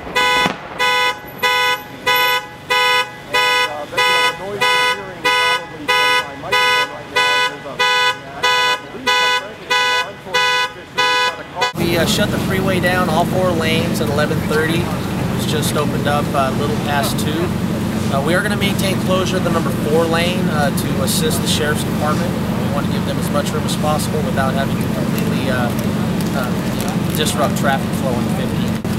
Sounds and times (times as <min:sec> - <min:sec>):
Speech: 0:03.3 - 0:17.5, 0:18.1 - 0:28.8.